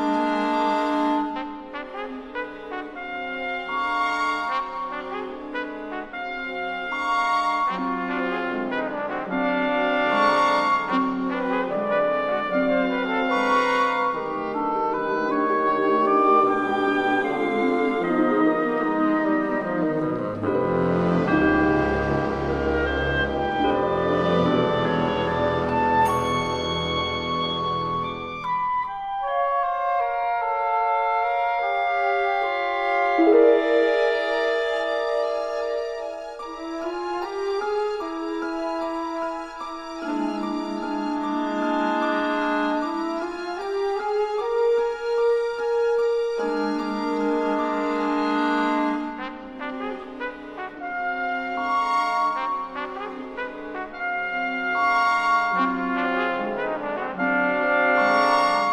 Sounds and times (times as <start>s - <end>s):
Music: 0.0s - 58.7s.